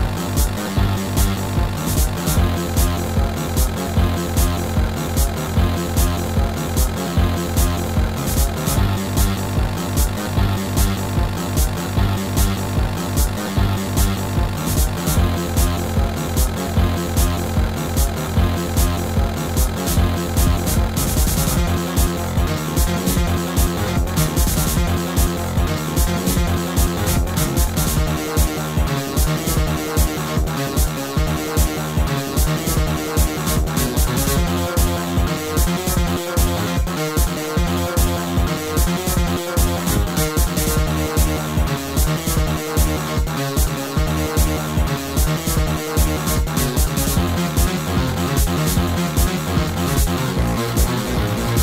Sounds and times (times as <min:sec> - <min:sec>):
Video game music: 0:00.0 - 0:51.6.